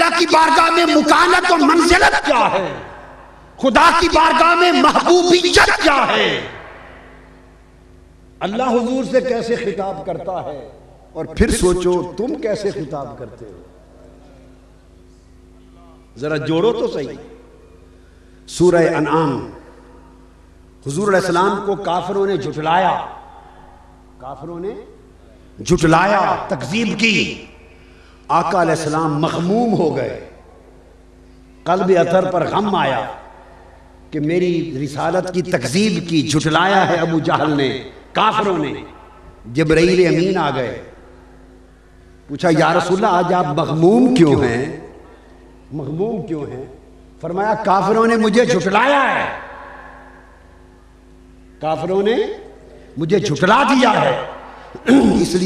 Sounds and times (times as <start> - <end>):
Male speech, man speaking: 0.0 - 2.9, 3.6 - 6.6, 8.4 - 14.3, 15.8 - 17.4, 18.5 - 19.6, 20.8 - 23.2, 24.2 - 25.0, 25.6 - 27.5, 28.3 - 30.3, 31.7 - 33.2, 34.1 - 40.9, 42.3 - 44.9, 45.7 - 49.5, 51.6 - 55.4
Narration, monologue: 0.0 - 55.4.